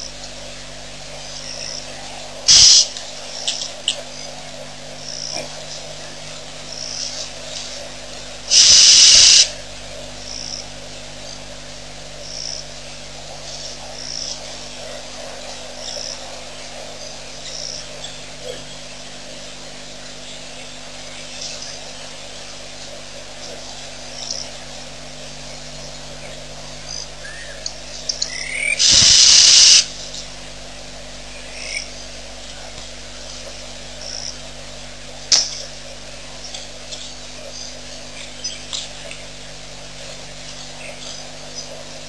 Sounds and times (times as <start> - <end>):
Outside, rural or natural: 0.0 - 42.0.